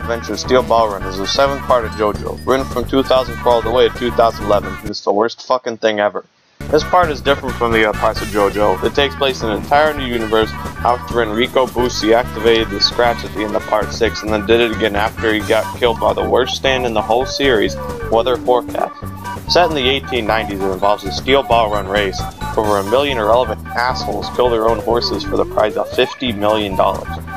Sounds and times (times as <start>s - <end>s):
Music: 0.0s - 4.9s, 6.6s - 27.3s
Speech: 0.0s - 27.2s.